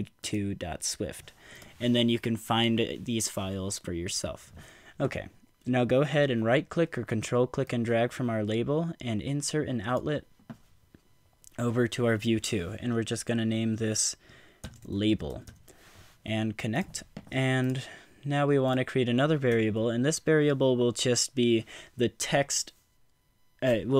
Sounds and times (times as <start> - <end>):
Speech: 0.0 - 10.3, 11.6 - 14.2, 14.9 - 15.5, 16.3 - 22.8, 23.6 - 23.9.